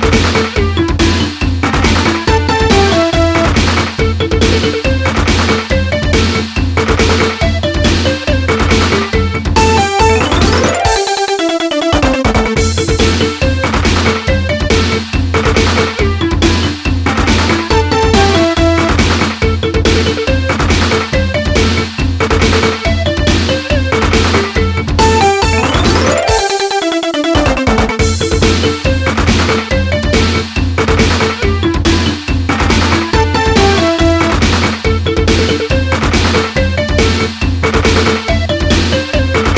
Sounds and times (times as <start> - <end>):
Theme music: 0.0 - 15.1, 15.8 - 22.0, 22.6 - 37.4.